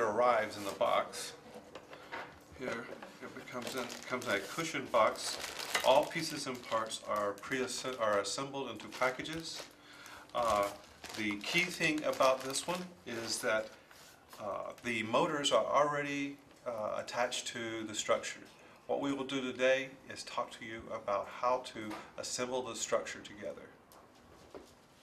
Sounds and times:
Speech: 0.0s - 1.4s, 2.6s - 9.7s, 10.3s - 13.7s, 14.4s - 23.8s.

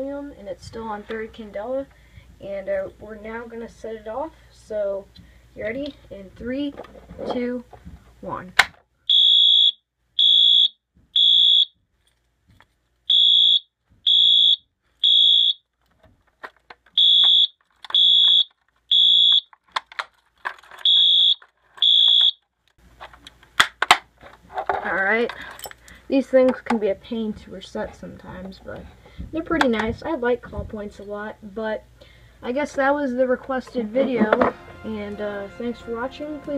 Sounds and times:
Speech: 0.0s - 8.6s, 24.8s - 25.4s, 26.1s - 31.8s, 32.4s - 36.5s
Fire alarm: 9.1s - 11.8s, 13.1s - 15.6s, 17.0s - 19.5s, 20.8s - 22.4s.

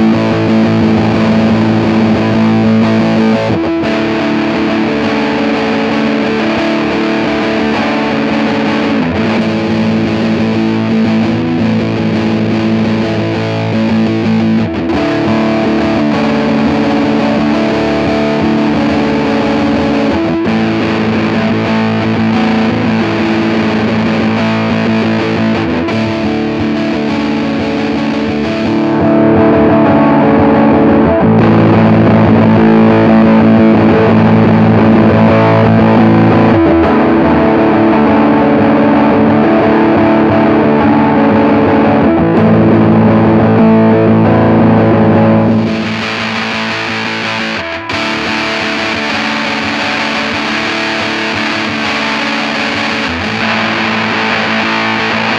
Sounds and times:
Distortion: 0.0s - 55.3s
Music: 0.0s - 55.3s.

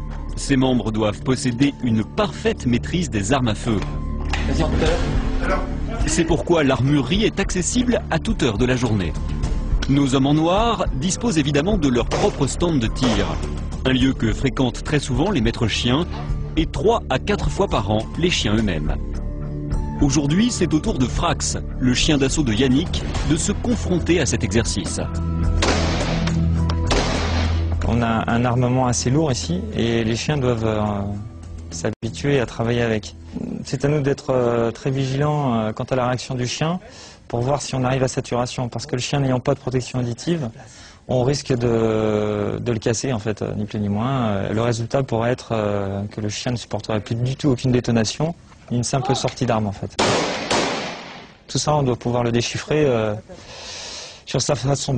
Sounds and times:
Speech: 0.4s - 3.9s, 4.5s - 9.2s, 9.9s - 19.0s, 20.0s - 25.1s, 27.8s - 50.0s, 51.5s - 53.4s, 54.3s - 54.9s.

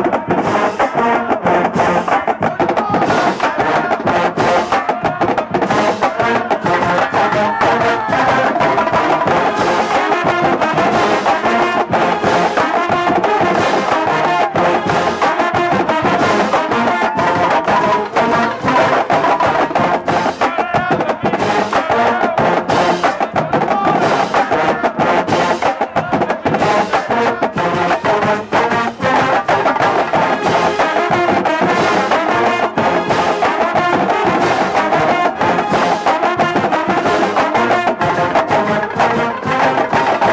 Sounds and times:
Music: 0.0s - 40.3s.

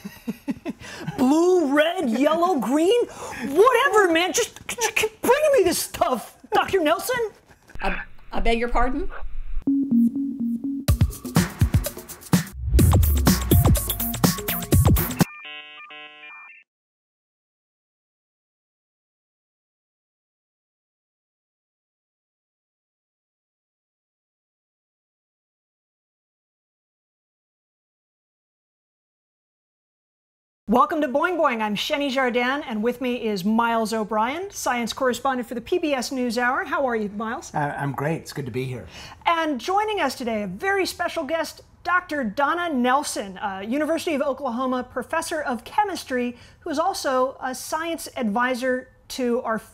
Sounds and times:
Music: 9.6s - 16.6s.

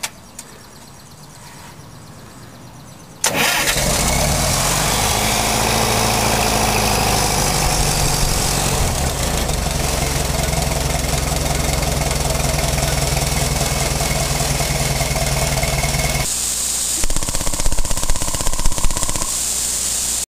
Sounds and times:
Vehicle: 2.8s - 16.3s
Engine: 3.2s - 20.2s.

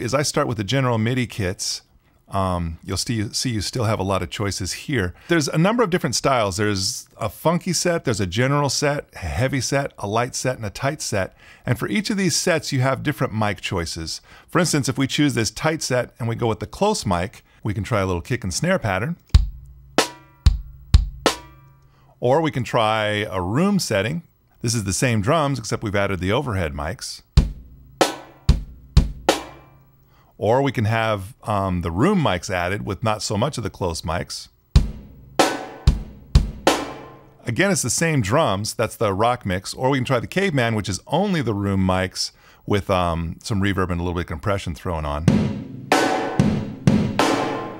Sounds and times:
Speech: 0.0s - 19.2s, 22.2s - 27.3s, 30.4s - 34.6s, 37.4s - 45.4s.

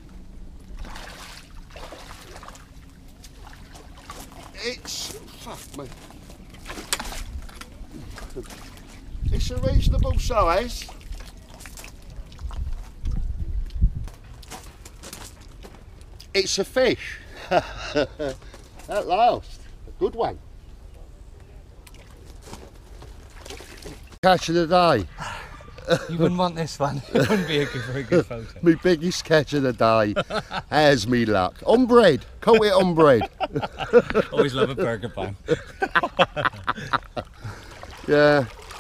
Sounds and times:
Outside, rural or natural: 0.0s - 38.8s.

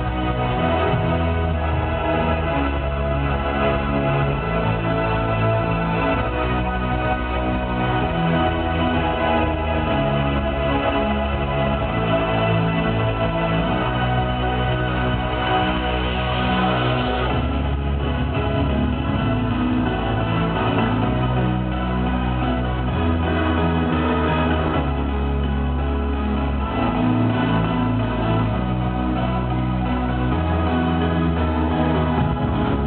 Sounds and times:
Music: 0.0s - 32.8s.

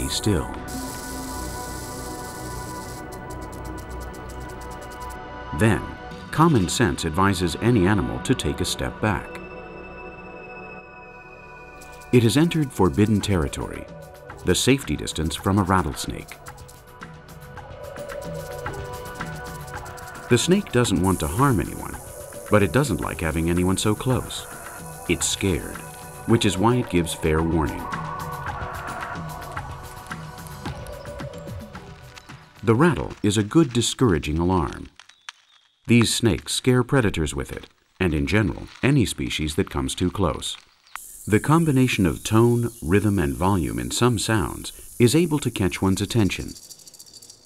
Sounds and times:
Speech: 0.0s - 0.6s, 5.5s - 9.4s, 12.2s - 16.4s, 20.3s - 24.5s, 25.1s - 27.9s, 32.6s - 34.9s, 35.9s - 40.6s, 41.3s - 46.6s
Music: 0.0s - 34.2s.

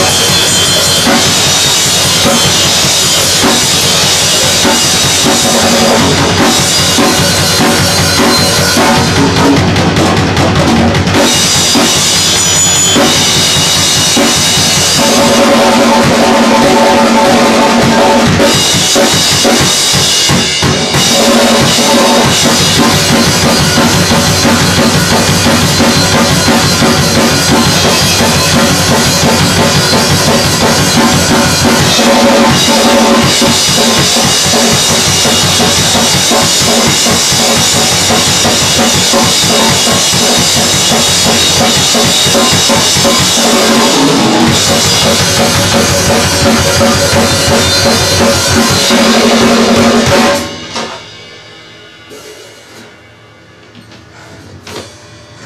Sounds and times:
Bass drum: 0.0s - 50.8s
Drum kit: 0.0s - 55.4s.

